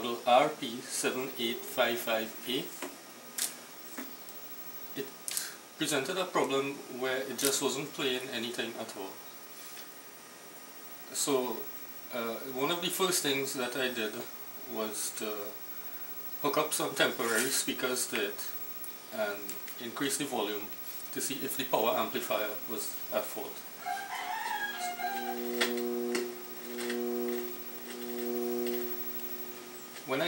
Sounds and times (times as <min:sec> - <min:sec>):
Speech: 0:00.0 - 0:02.8, 0:05.8 - 0:09.2, 0:11.1 - 0:15.6, 0:16.4 - 0:23.6, 0:30.0 - 0:30.2.